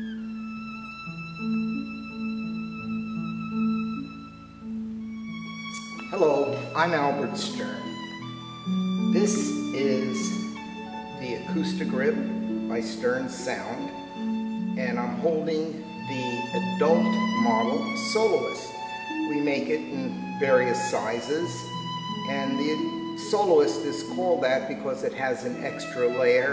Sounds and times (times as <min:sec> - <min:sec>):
Violin, fiddle: 0:00.0 - 0:26.5
Speech: 0:06.1 - 0:07.9, 0:09.1 - 0:10.4, 0:11.2 - 0:13.9, 0:14.8 - 0:21.6, 0:22.3 - 0:26.5.